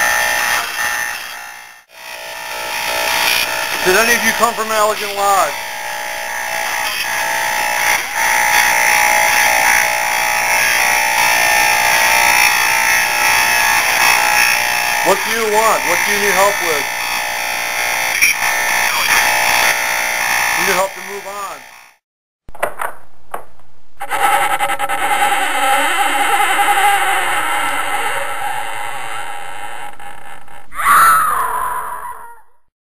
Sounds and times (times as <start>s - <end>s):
Speech: 3.8s - 5.6s, 15.0s - 16.9s, 20.6s - 21.6s.